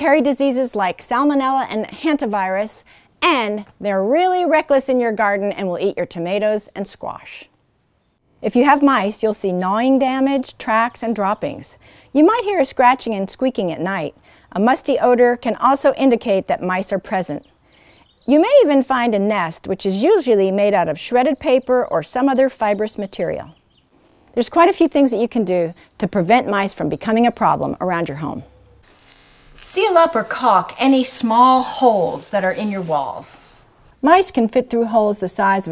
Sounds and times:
Speech: 0:00.0 - 0:07.5, 0:08.4 - 0:17.4, 0:18.3 - 0:23.6, 0:24.4 - 0:28.5, 0:29.7 - 0:35.7.

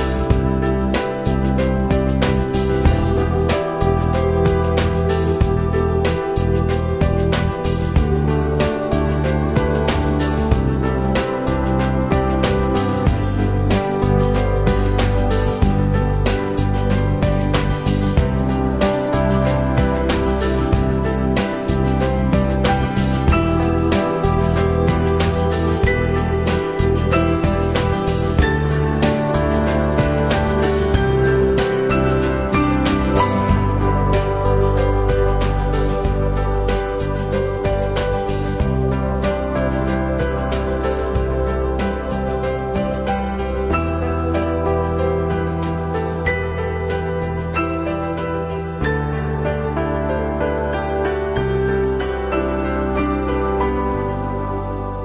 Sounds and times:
Music: 0:00.0 - 0:55.0.

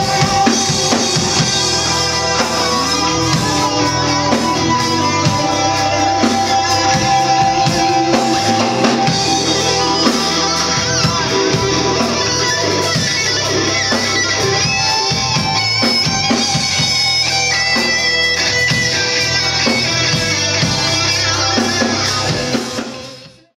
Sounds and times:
Guitar: 0:00.0 - 0:23.5.

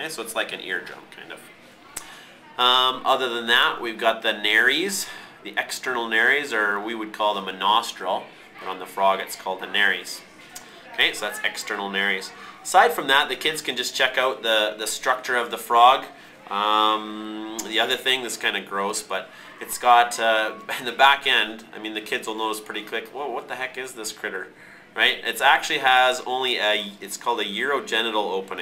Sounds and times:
Speech: 0:00.0 - 0:28.6.

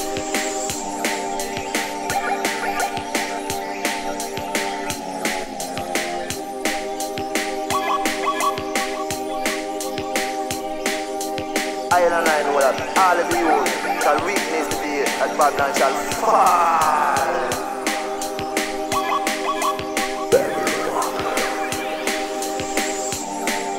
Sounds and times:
Music: 0:00.0 - 0:23.7.

